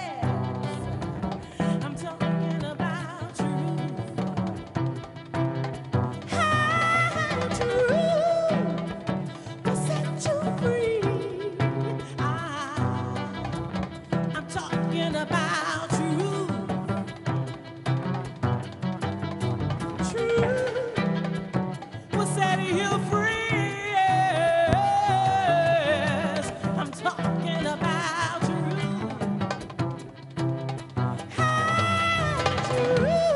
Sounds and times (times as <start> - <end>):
Cello: 0.0 - 33.3
Double bass: 0.0 - 33.3
Jazz: 0.0 - 33.3
Violin, fiddle: 0.0 - 33.3.